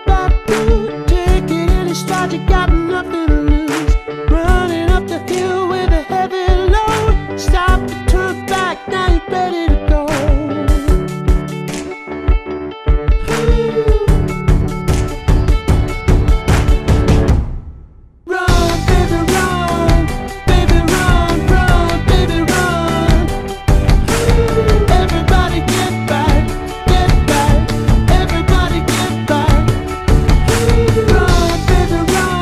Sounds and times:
Music: 0.0s - 32.4s.

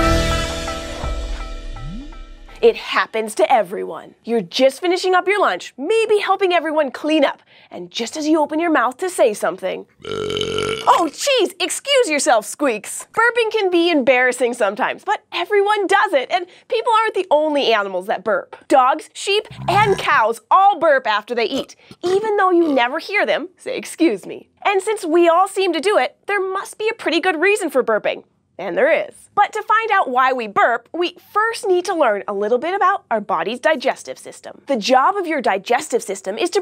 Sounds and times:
Speech: 2.6s - 9.9s, 10.9s - 36.6s.

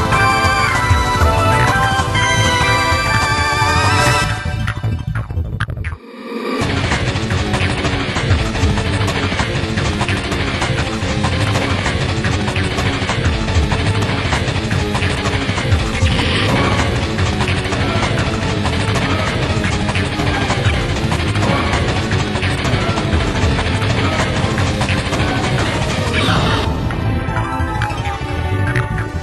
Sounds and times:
Music: 0.0s - 29.2s.

